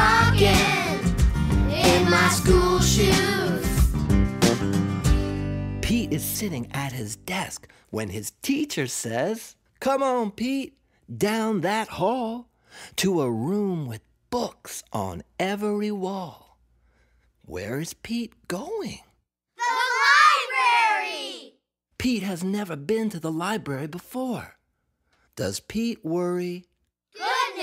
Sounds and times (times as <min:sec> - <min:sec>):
Music: 0:00.0 - 0:07.3
Speech: 0:05.8 - 0:16.6, 0:17.5 - 0:21.4, 0:22.0 - 0:24.6, 0:25.4 - 0:27.6.